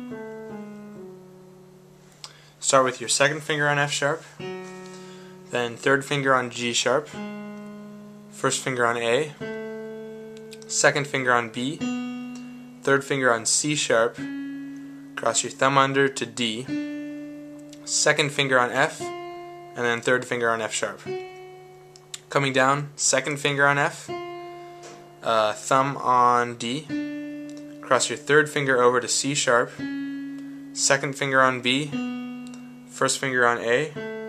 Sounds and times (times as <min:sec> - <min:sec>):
Speech: 0:02.6 - 0:04.3, 0:05.5 - 0:07.2, 0:08.4 - 0:09.4, 0:10.6 - 0:11.8, 0:12.9 - 0:14.2, 0:15.2 - 0:16.7, 0:17.8 - 0:19.1, 0:19.8 - 0:21.1, 0:22.2 - 0:24.2, 0:25.2 - 0:26.9, 0:27.8 - 0:29.8, 0:30.8 - 0:32.0, 0:33.0 - 0:34.0.